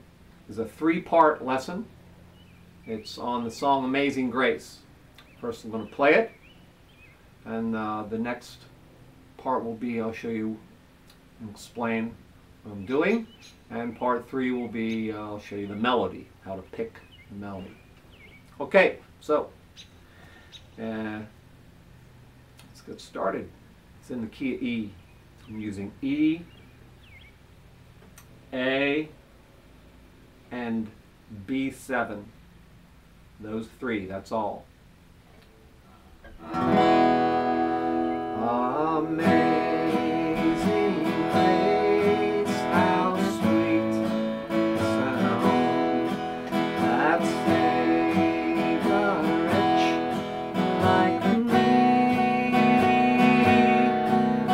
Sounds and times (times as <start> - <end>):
Speech: 0.5 - 1.9, 2.9 - 6.3, 7.4 - 8.7, 9.4 - 10.6, 11.4 - 17.8, 18.6 - 19.6, 20.8 - 21.3, 22.7 - 26.5, 28.5 - 29.2, 30.5 - 32.3, 33.4 - 34.7.